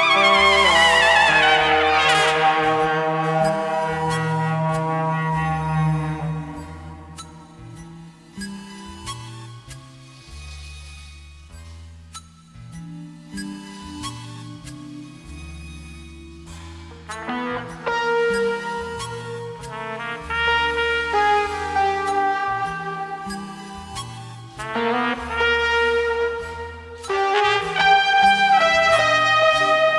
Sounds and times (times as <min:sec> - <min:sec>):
Trombone: 0:00.0 - 0:07.2, 0:17.1 - 0:23.8, 0:24.6 - 0:29.9
Jazz: 0:00.0 - 0:09.2, 0:16.6 - 0:29.9.